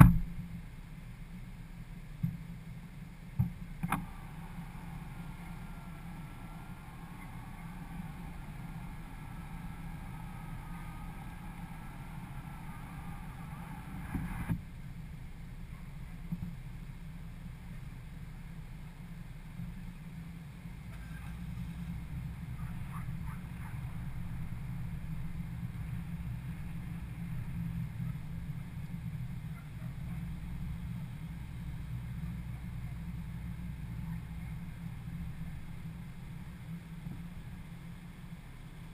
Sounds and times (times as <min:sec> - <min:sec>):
Car: 0:00.0 - 0:38.9.